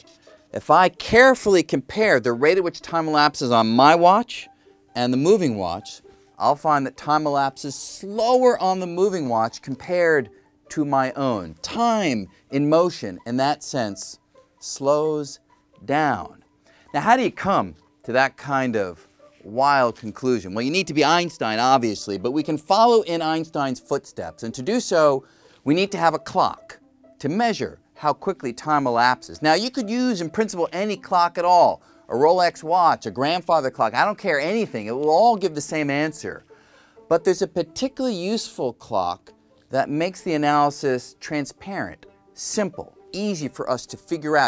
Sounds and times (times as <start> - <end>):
Speech: 0.0 - 36.4, 37.1 - 44.4.